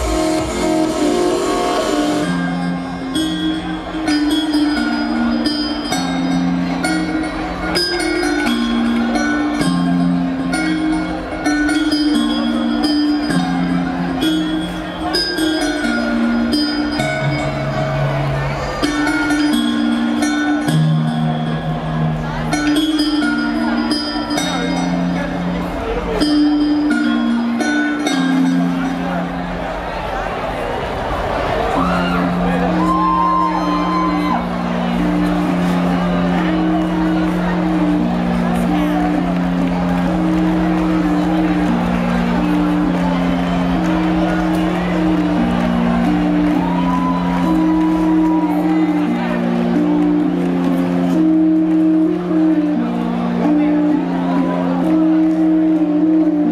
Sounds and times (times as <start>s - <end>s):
Happy music: 0.0s - 29.5s, 31.8s - 56.5s.